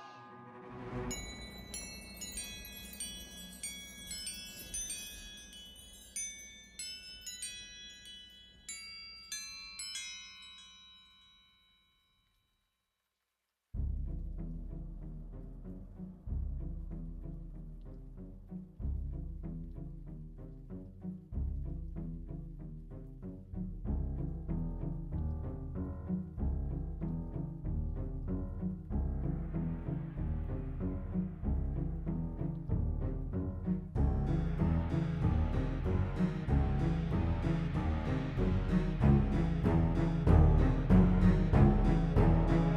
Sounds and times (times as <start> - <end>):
Glockenspiel: 0.9 - 12.9
Chime: 1.0 - 12.9
Marimba, xylophone: 1.1 - 11.8.